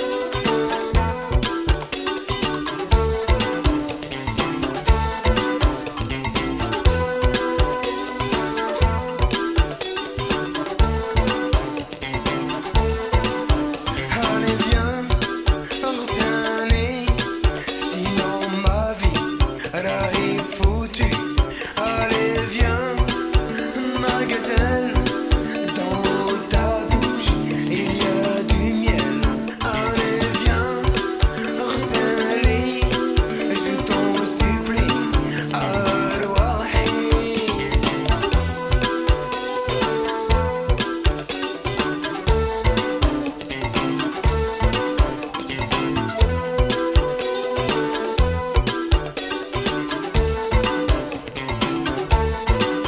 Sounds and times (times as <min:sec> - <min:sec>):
Soul music: 0:00.0 - 0:52.8.